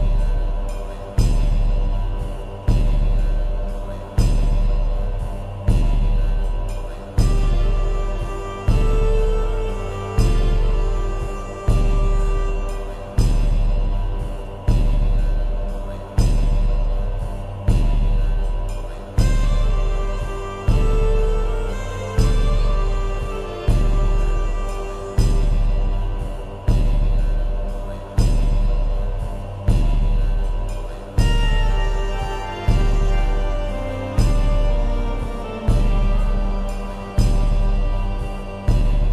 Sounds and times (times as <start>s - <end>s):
Music: 0.0s - 39.1s.